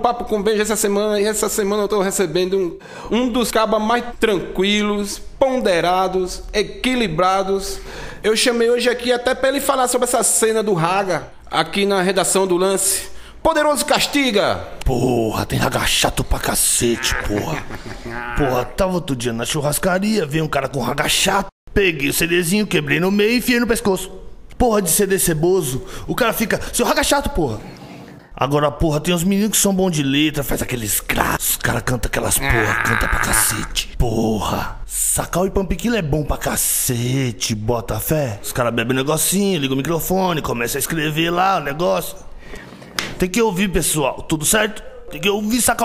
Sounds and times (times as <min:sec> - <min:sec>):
Speech: 0:00.0 - 0:27.7, 0:28.4 - 0:42.3, 0:43.2 - 0:45.8.